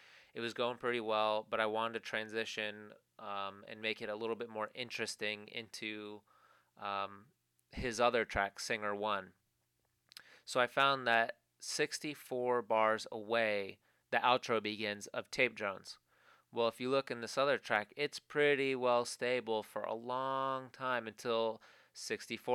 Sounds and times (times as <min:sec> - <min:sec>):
Speech: 0:00.4 - 0:06.2, 0:06.8 - 0:09.4, 0:10.5 - 0:16.0, 0:16.6 - 0:22.5.